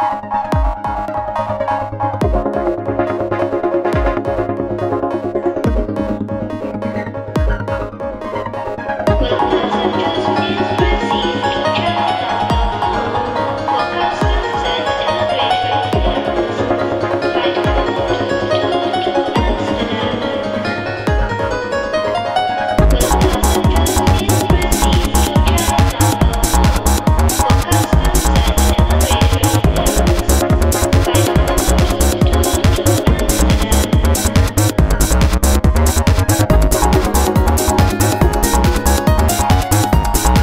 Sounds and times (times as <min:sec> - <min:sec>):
Video game music: 0:00.0 - 0:40.4.